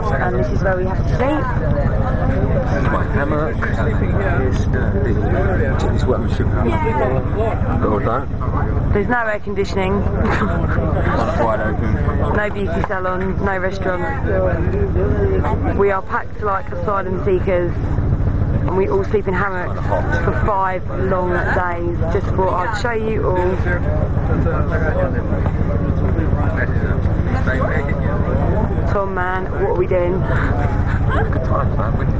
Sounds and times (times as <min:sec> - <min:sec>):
Vehicle: 0:00.0 - 0:32.2.